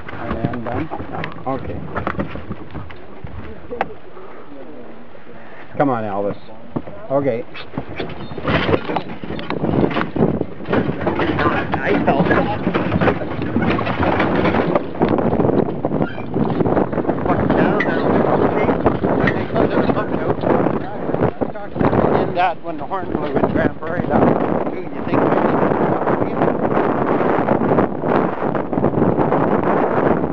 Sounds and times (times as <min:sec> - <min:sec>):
Speech: 0:11.4 - 0:12.6, 0:19.5 - 0:25.3.